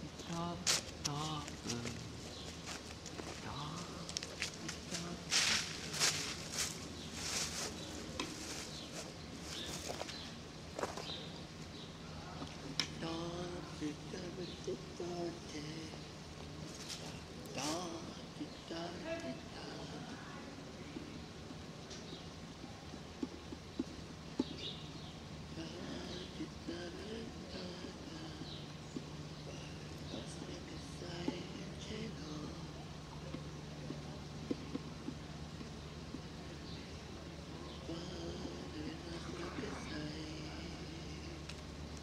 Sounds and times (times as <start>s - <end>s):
Speech: 0.0s - 2.2s, 3.4s - 6.4s, 17.5s - 21.2s, 29.5s - 34.4s, 36.7s - 41.4s.